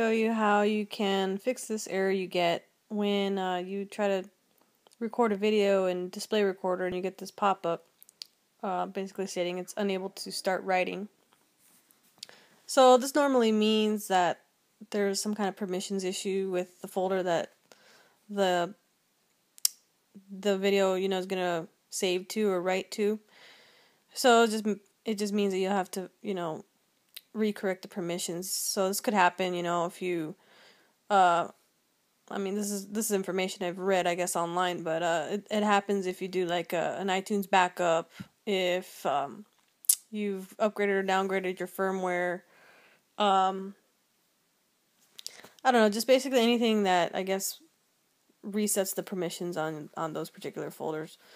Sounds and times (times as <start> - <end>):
Speech: 0.0 - 7.9, 8.6 - 11.1, 12.7 - 17.6, 18.3 - 18.8, 19.6 - 23.3, 24.1 - 30.4, 31.1 - 31.6, 32.3 - 42.5, 43.2 - 43.8, 45.2 - 47.7, 48.4 - 51.2.